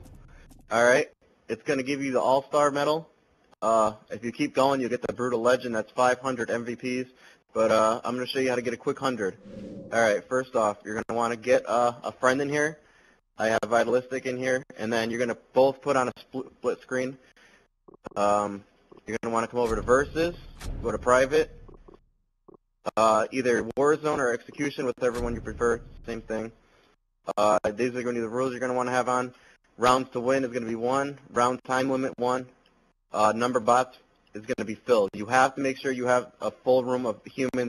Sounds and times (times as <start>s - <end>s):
Speech: 0.7s - 12.8s, 13.4s - 17.2s, 18.1s - 21.5s, 22.9s - 26.5s, 27.3s - 37.6s.